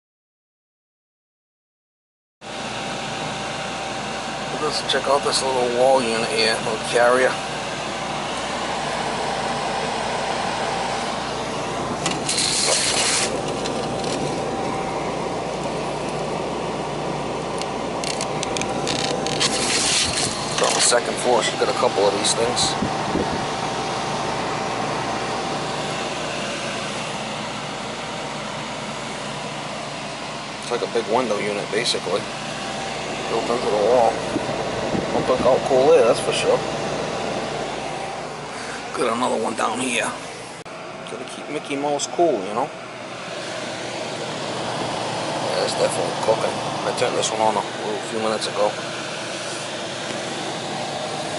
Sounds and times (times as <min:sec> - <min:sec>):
Air conditioning: 0:02.5 - 0:51.3
Speech: 0:04.5 - 0:07.4, 0:20.6 - 0:22.8, 0:30.6 - 0:32.3, 0:33.3 - 0:34.2, 0:35.1 - 0:36.6, 0:38.9 - 0:40.2, 0:41.0 - 0:42.7, 0:45.5 - 0:48.8.